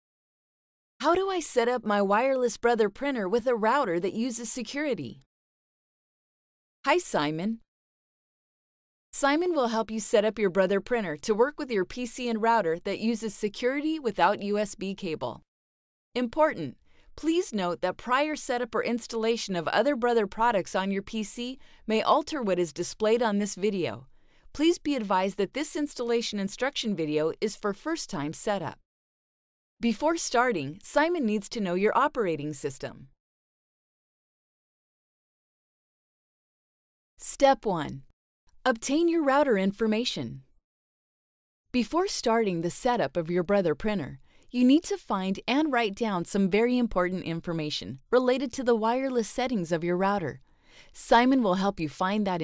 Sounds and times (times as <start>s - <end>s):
Speech: 1.0s - 5.2s, 6.9s - 7.6s, 9.2s - 15.4s, 16.2s - 24.0s, 24.6s - 28.8s, 29.8s - 33.0s, 37.2s - 38.0s, 38.7s - 40.4s, 41.8s - 50.4s, 51.0s - 52.4s.